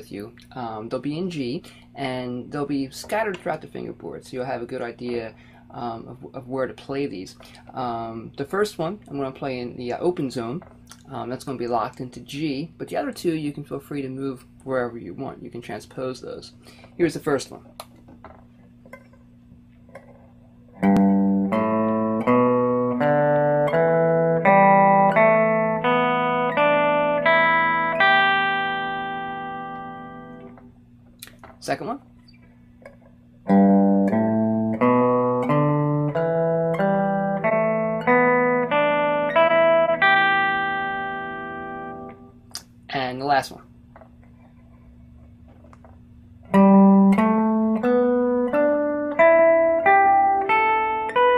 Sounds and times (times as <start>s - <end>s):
Guitar: 0.0s - 51.3s.